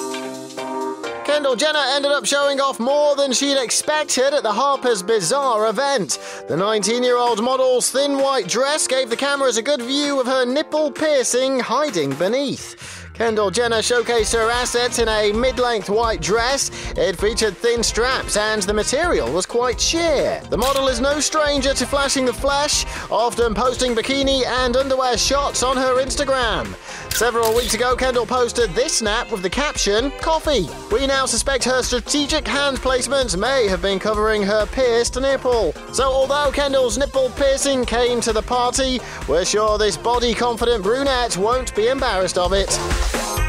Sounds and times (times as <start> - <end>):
Music: 0.0 - 43.4
Speech: 1.3 - 42.8.